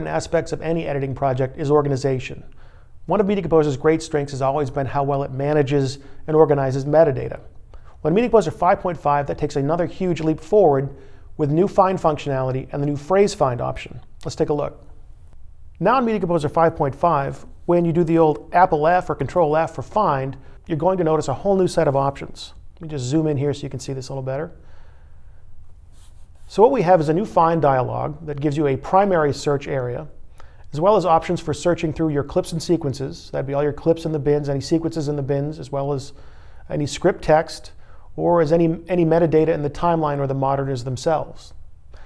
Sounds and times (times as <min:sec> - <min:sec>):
Speech: 0:00.0 - 0:14.9, 0:15.8 - 0:24.6, 0:26.5 - 0:41.6.